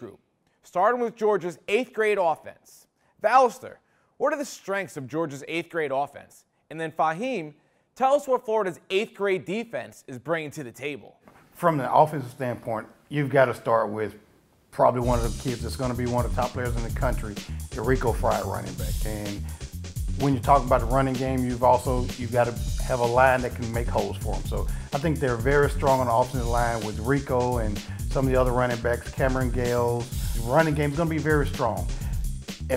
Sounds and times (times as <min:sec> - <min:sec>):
Speech: 0:00.0 - 0:14.2, 0:14.8 - 0:19.5, 0:20.2 - 0:32.0
Music: 0:15.0 - 0:32.7.